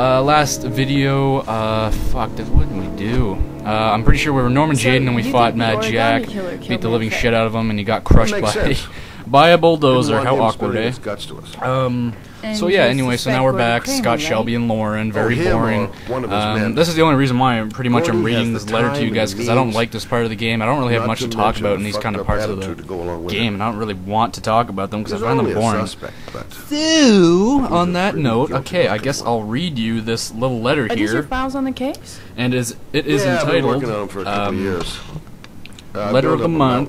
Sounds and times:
Speech: 0.0s - 35.1s, 36.0s - 36.8s.

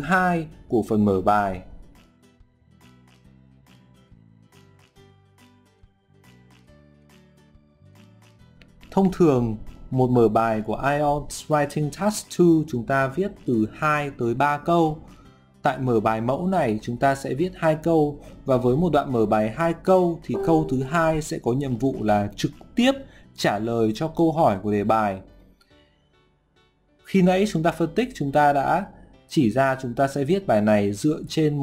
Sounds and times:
Speech: 0.0s - 1.7s, 9.0s - 15.0s, 15.7s - 25.3s, 27.1s - 31.6s
Music: 0.0s - 31.6s.

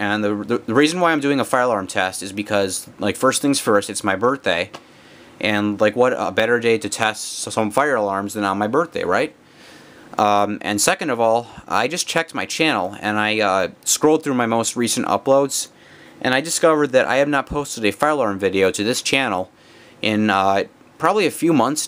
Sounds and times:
Speech: 0.0s - 4.8s, 5.4s - 9.4s, 10.2s - 21.8s.

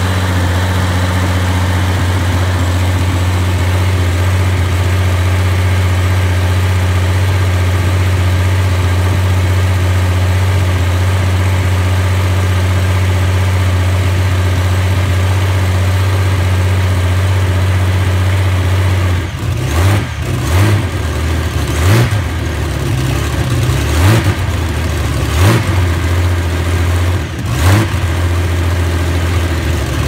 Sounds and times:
Idling: 0.0s - 30.0s
Vehicle: 0.0s - 30.0s.

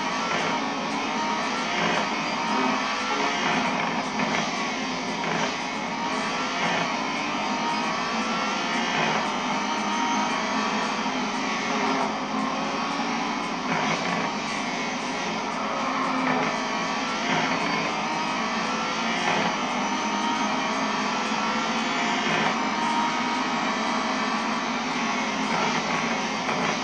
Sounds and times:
Car: 0.0s - 26.8s.

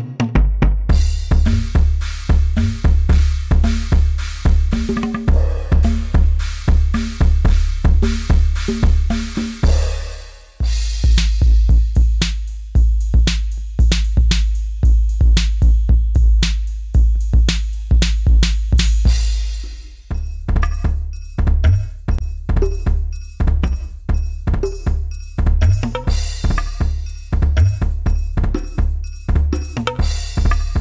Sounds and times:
Music: 0.0s - 30.8s.

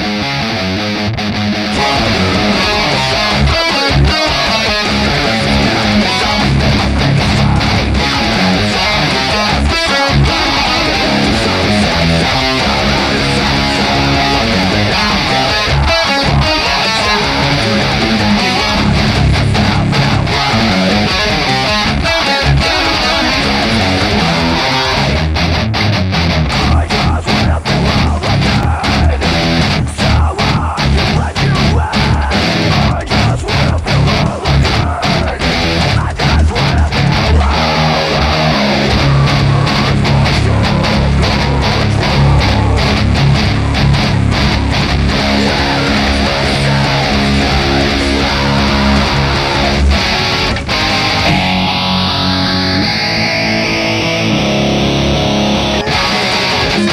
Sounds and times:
Electric guitar: 0.0s - 56.9s.

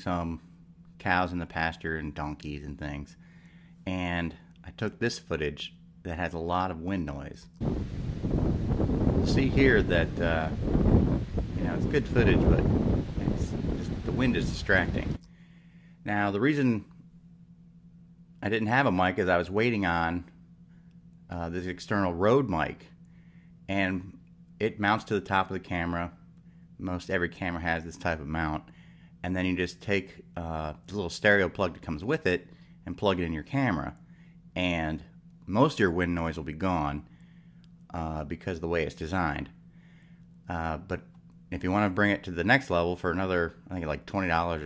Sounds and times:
Speech: 0.0s - 0.4s, 1.0s - 3.2s, 3.9s - 7.6s, 9.2s - 10.6s, 11.6s - 12.6s, 13.2s - 15.2s, 16.0s - 16.9s, 18.4s - 20.3s, 21.3s - 22.9s, 23.7s - 26.2s, 26.8s - 34.0s, 34.6s - 37.1s, 37.9s - 39.5s, 40.5s - 44.6s.

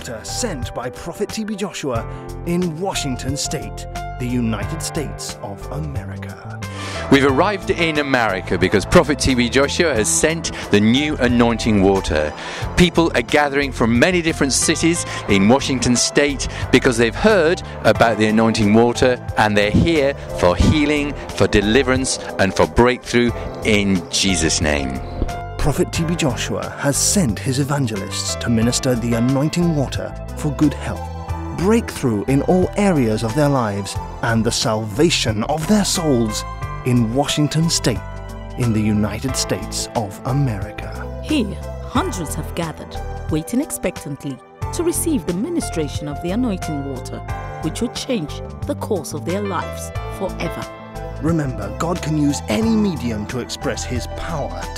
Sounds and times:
Speech: 0.0s - 25.0s, 25.6s - 38.0s, 38.6s - 54.7s
Music: 0.0s - 54.7s.

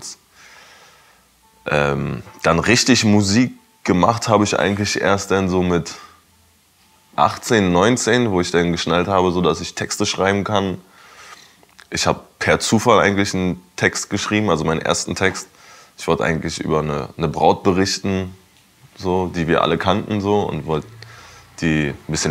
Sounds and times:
Speech: 0.0s - 0.2s, 1.6s - 6.2s, 7.2s - 10.9s, 11.8s - 18.4s, 19.0s - 21.0s, 21.6s - 22.3s.

